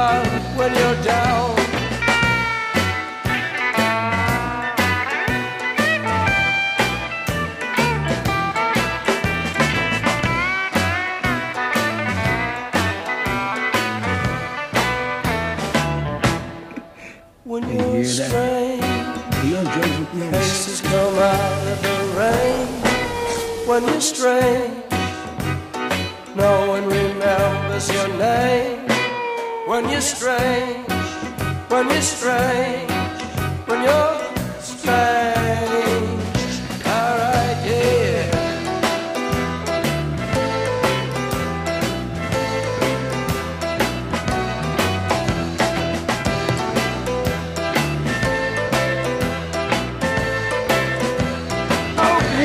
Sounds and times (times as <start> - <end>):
Country: 0.0 - 52.4.